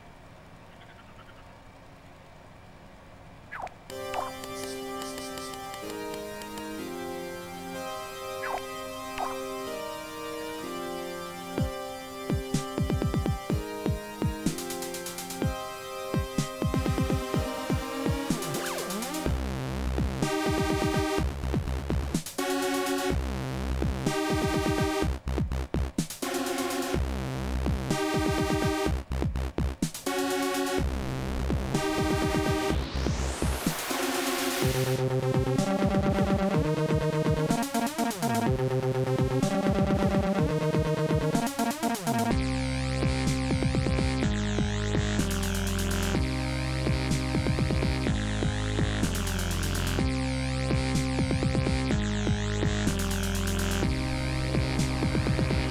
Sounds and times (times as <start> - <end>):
Video game music: 3.6 - 55.7.